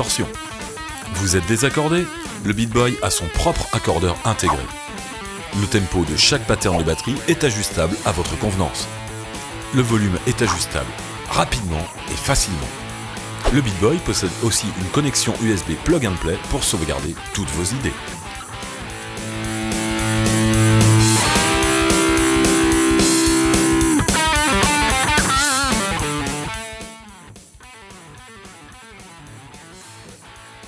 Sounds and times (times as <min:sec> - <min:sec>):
Speech: 0:00.0 - 0:00.4, 0:01.0 - 0:04.7, 0:05.5 - 0:08.9, 0:09.7 - 0:12.8, 0:13.4 - 0:18.1
Music: 0:00.0 - 0:30.6.